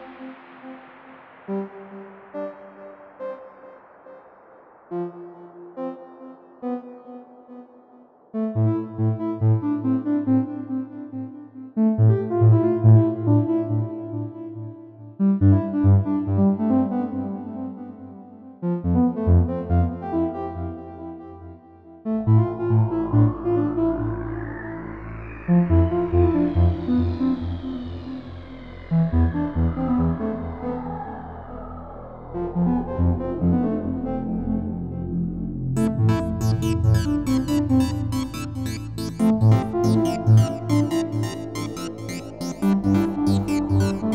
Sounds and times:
Trance music: 0.0s - 14.8s, 18.8s - 44.1s
Synthesizer: 0.0s - 44.1s.

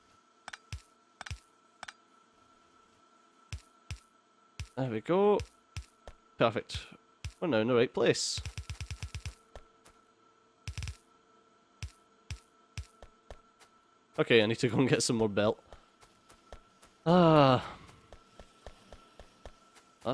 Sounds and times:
Speech: 4.8s - 5.4s, 6.4s - 8.5s, 14.2s - 15.6s, 17.1s - 17.8s.

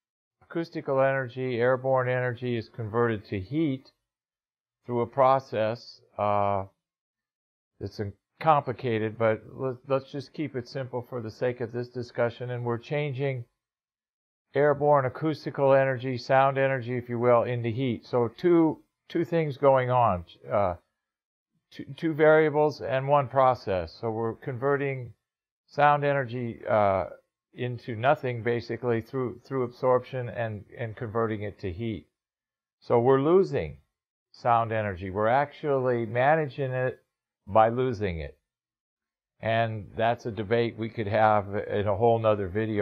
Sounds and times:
Speech: 0.5s - 4.0s, 4.9s - 6.8s, 7.8s - 13.6s, 14.6s - 20.9s, 21.8s - 32.1s, 32.8s - 38.4s, 39.4s - 42.8s.

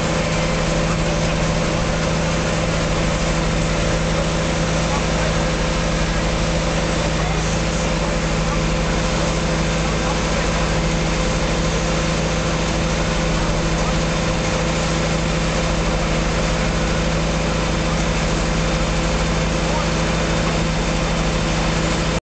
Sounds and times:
Pump (liquid): 0.0s - 22.2s.

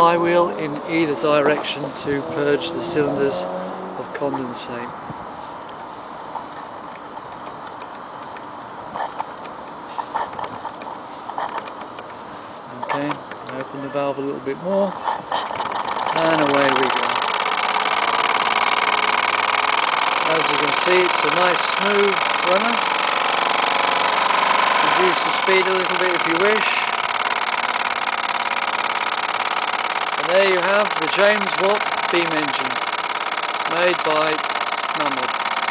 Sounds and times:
Speech: 0.0s - 3.4s, 12.7s - 15.0s, 16.2s - 17.1s, 20.3s - 22.8s, 24.8s - 26.8s, 30.2s - 32.8s, 33.7s - 34.4s, 35.0s - 35.3s
Engine: 0.0s - 35.7s.

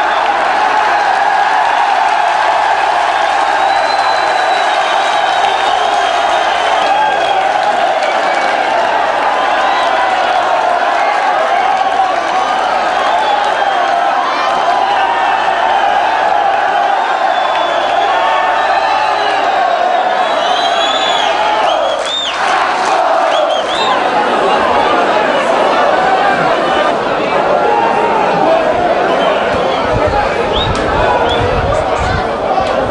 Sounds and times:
Speech: 23.4s - 32.9s.

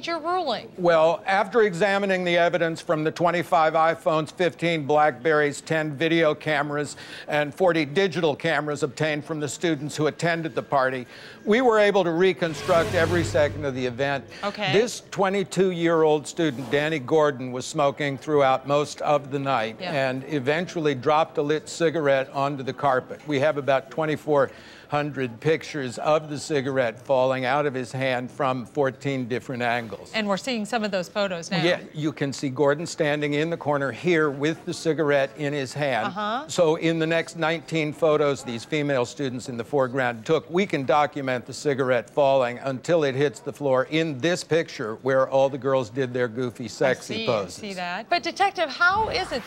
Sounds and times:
Speech: 7.6s - 15.4s, 31.5s - 47.6s.

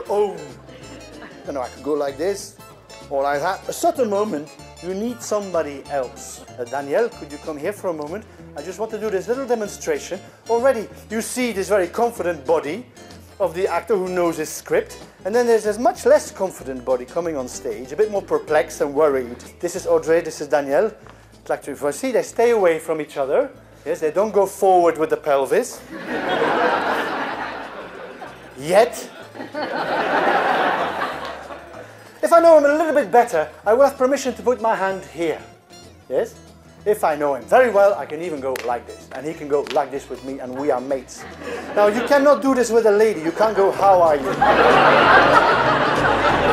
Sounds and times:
Speech: 0.0s - 0.6s, 1.4s - 12.8s, 13.4s - 25.8s, 28.6s - 29.2s, 32.2s - 35.5s, 36.1s - 41.2s, 41.8s - 44.4s
Music: 0.0s - 46.5s.

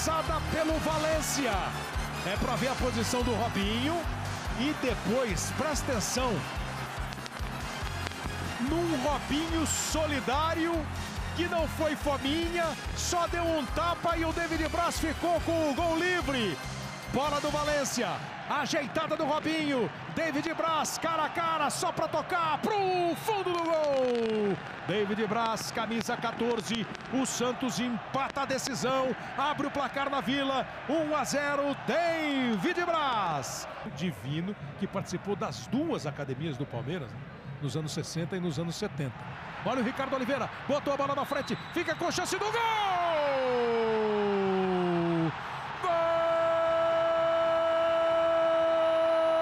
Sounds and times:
Speech: 0.0s - 4.0s, 4.6s - 6.4s, 8.6s - 49.4s
Music: 0.0s - 21.9s, 31.0s - 44.7s.

